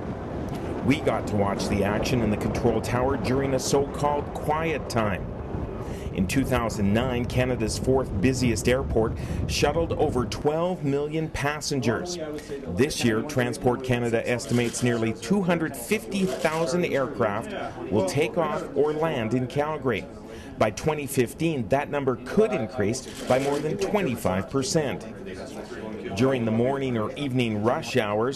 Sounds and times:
Speech: 0.8s - 5.2s, 6.1s - 28.3s.

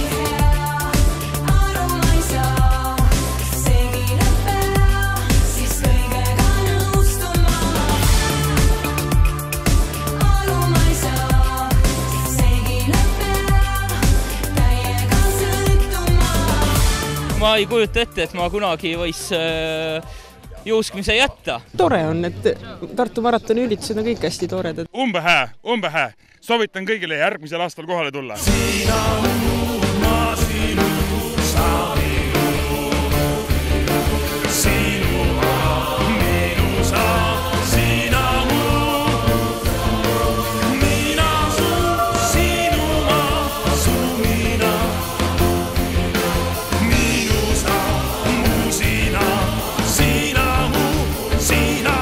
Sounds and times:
Music: 0.0s - 23.2s, 28.4s - 52.0s
Speech: 17.3s - 28.4s.

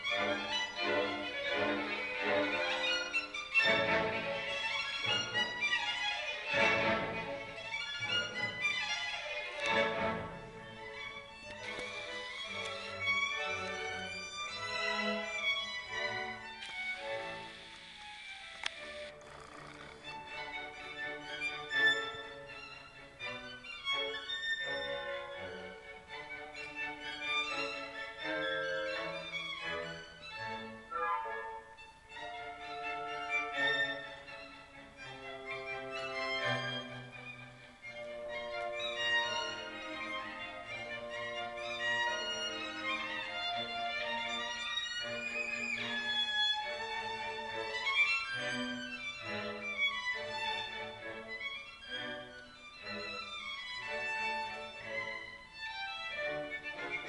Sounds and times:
Violin, fiddle: 0.0s - 57.0s.

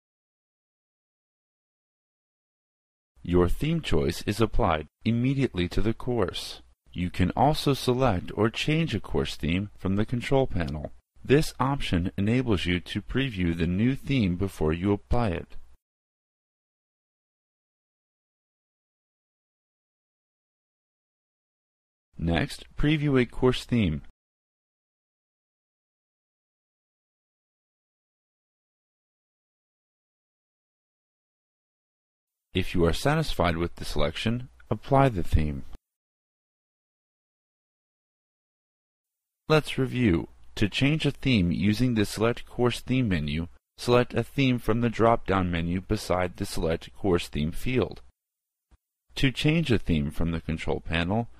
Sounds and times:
Speech synthesizer: 3.3s - 15.6s, 22.2s - 24.1s, 32.6s - 35.7s, 39.5s - 48.0s, 49.2s - 51.3s.

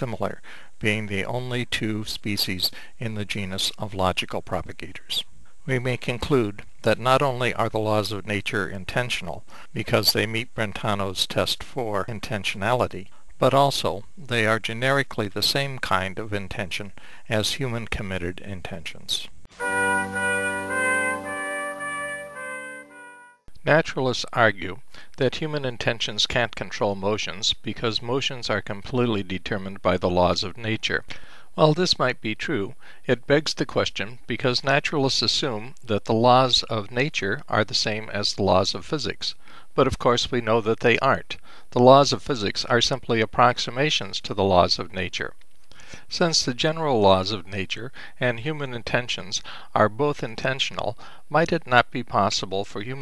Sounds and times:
Speech: 0.0s - 19.4s, 23.5s - 45.4s, 46.1s - 53.0s
Music: 19.5s - 23.4s.

